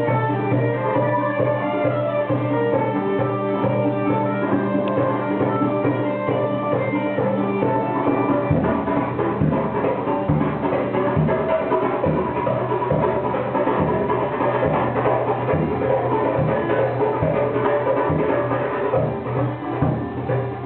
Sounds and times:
Independent music: 0.0s - 20.6s
Jazz: 0.0s - 20.6s
Middle Eastern music: 0.0s - 20.6s.

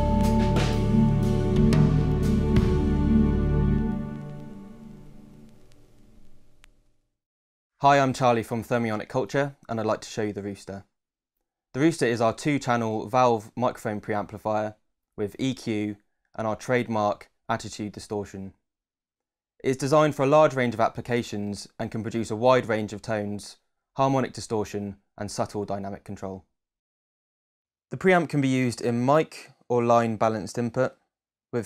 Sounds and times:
Speech: 7.8s - 10.9s, 11.8s - 18.6s, 19.6s - 26.5s, 27.9s - 31.0s.

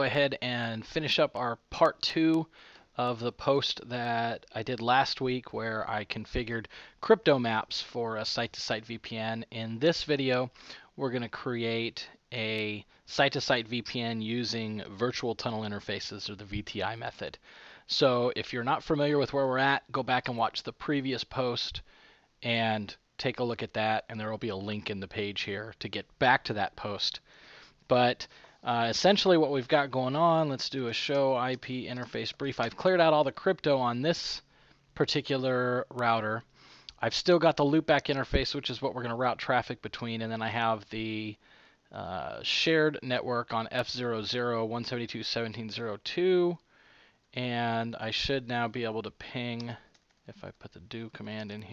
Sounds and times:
Speech: 0.0s - 27.3s, 27.9s - 46.6s, 47.4s - 51.7s.

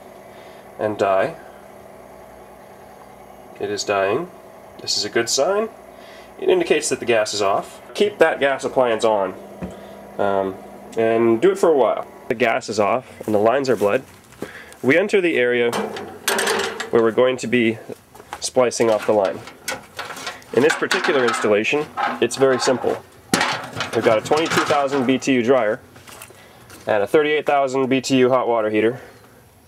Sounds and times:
Speech: 0.8s - 1.4s, 3.6s - 5.8s, 6.4s - 9.4s, 10.2s - 14.1s, 14.8s - 15.8s, 16.8s - 19.5s, 20.5s - 23.0s, 23.9s - 25.8s, 26.8s - 29.1s.

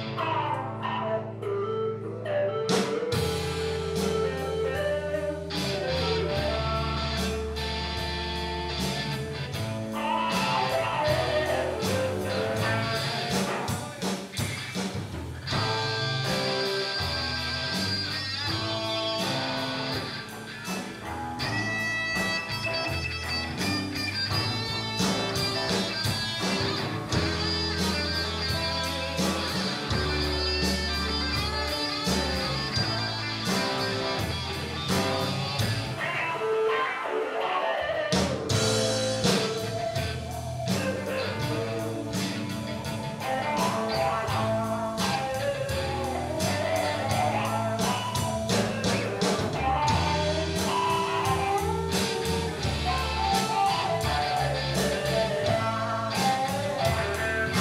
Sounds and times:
Music: 0.0s - 57.6s.

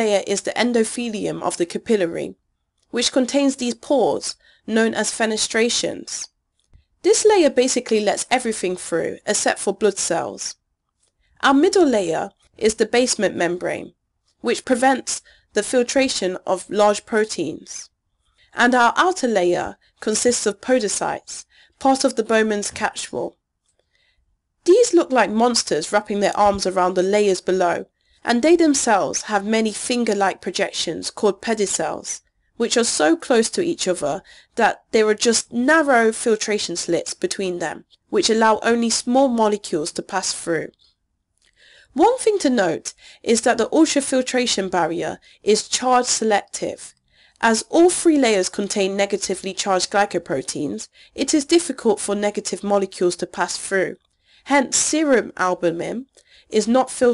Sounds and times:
Speech: 0.0s - 6.3s, 7.0s - 10.6s, 11.4s - 17.9s, 18.6s - 23.3s, 24.7s - 40.7s, 42.0s - 57.1s.

